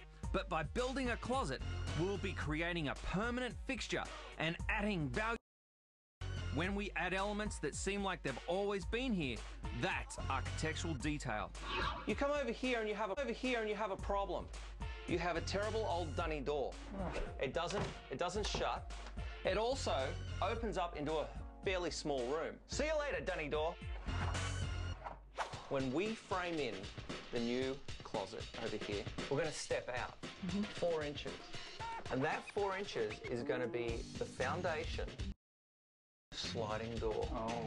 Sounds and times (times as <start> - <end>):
Music: 0.0 - 5.4, 6.2 - 35.4, 36.3 - 37.6
Speech: 0.3 - 5.4, 6.6 - 14.5, 15.1 - 18.8, 19.5 - 23.8, 25.7 - 31.4, 32.1 - 35.2, 36.4 - 37.6.